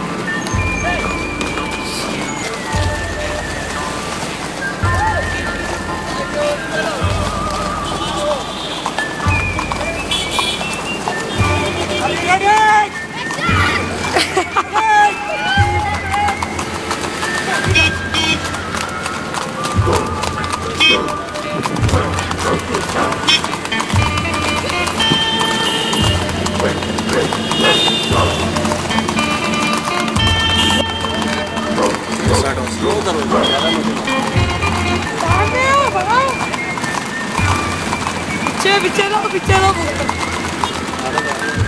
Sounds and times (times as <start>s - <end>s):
Clip-clop: 0.0s - 41.6s
Music: 0.0s - 41.6s.